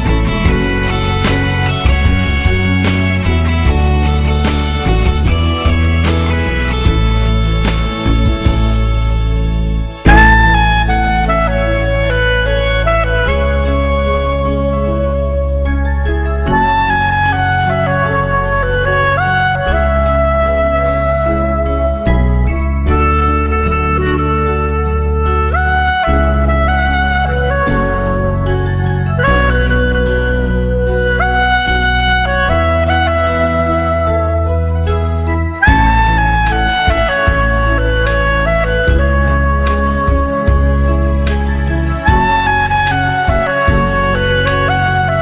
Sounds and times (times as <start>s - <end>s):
Brass instrument: 0.0s - 45.2s.